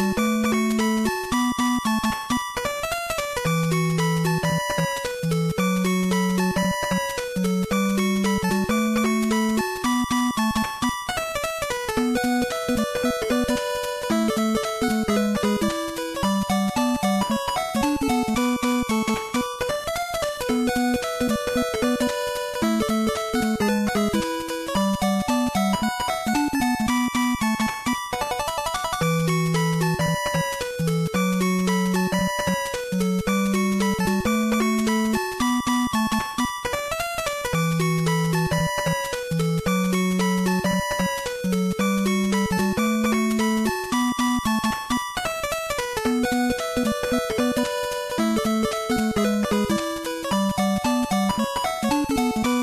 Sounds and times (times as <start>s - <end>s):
Music: 0.0s - 52.6s.